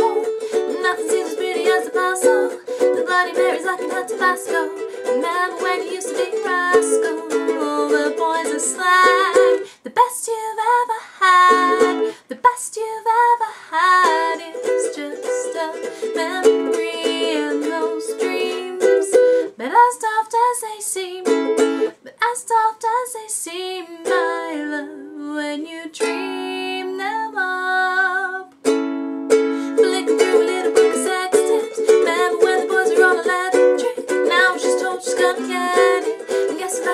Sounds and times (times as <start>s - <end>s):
Inside, small room: 0.0s - 36.9s
Ukulele: 0.0s - 36.9s.